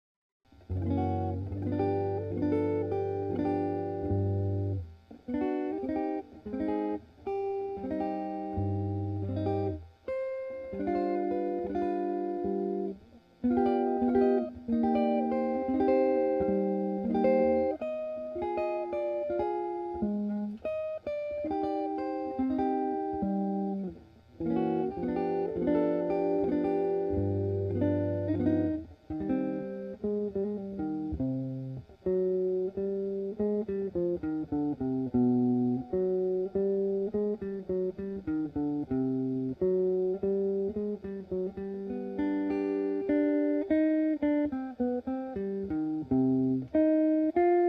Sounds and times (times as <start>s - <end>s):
Guitar: 0.5s - 47.6s.